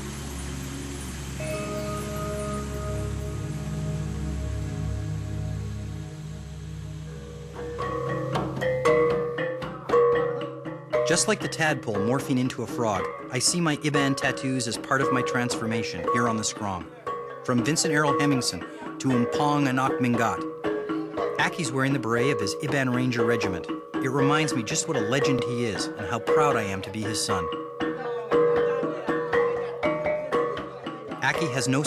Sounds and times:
Vibraphone: 0:00.1 - 0:04.0, 0:07.1 - 0:31.8.

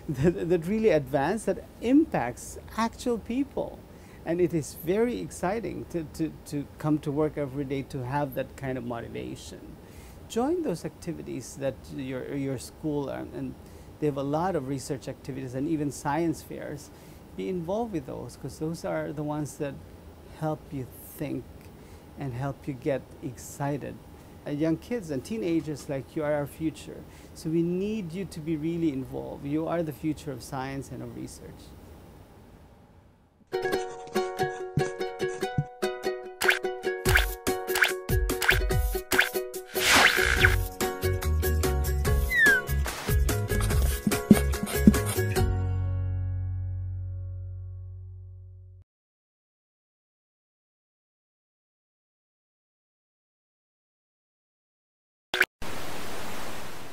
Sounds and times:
Music: 0:33.5 - 0:48.8.

